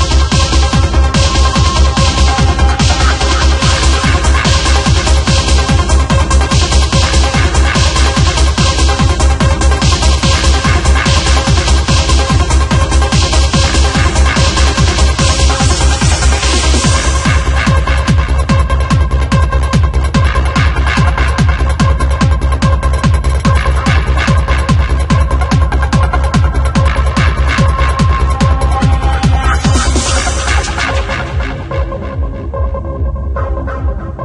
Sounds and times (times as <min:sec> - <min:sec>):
Music: 0:00.0 - 0:34.2.